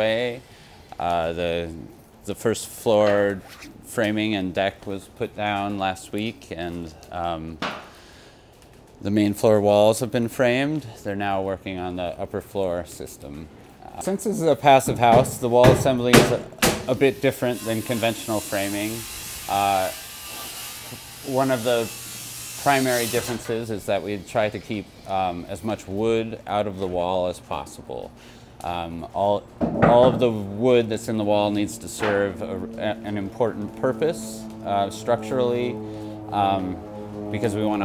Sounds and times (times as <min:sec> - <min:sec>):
Speech: 0:00.0 - 0:00.4, 0:01.0 - 0:07.6, 0:09.0 - 0:20.0, 0:21.3 - 0:21.9, 0:22.6 - 0:37.8.